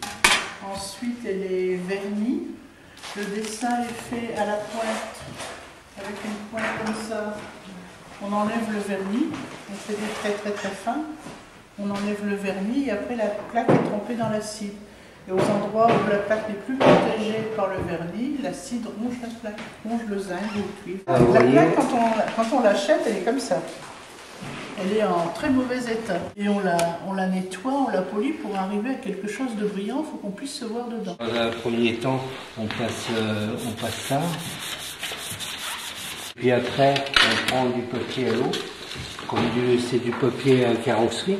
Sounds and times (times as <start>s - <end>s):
Speech: 11.8s - 23.8s, 24.8s - 34.5s, 36.4s - 38.6s, 39.3s - 41.3s.